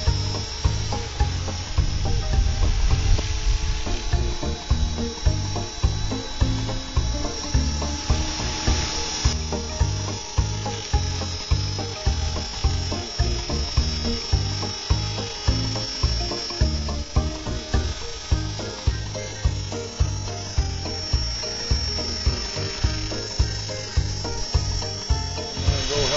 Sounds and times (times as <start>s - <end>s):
Electric shaver, electric razor: 0.0s - 26.1s.